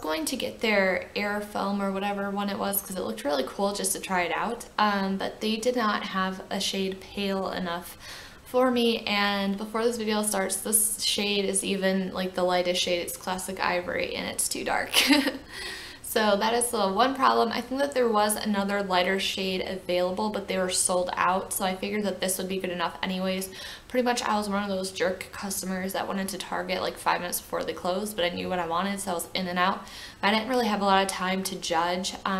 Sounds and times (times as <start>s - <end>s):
Speech: 0.0s - 15.4s, 16.0s - 32.3s.